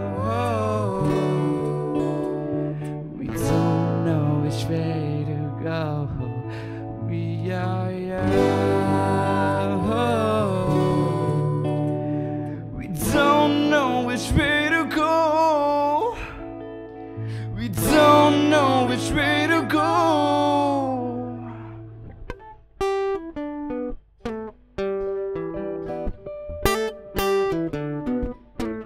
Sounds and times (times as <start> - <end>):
Electronic tuner: 0.0 - 28.8
Music: 0.0 - 28.8.